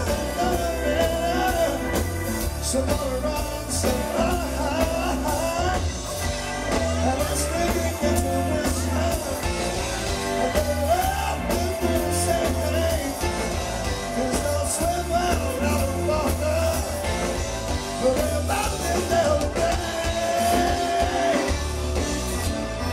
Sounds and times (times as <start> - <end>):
Music: 0.0 - 22.9.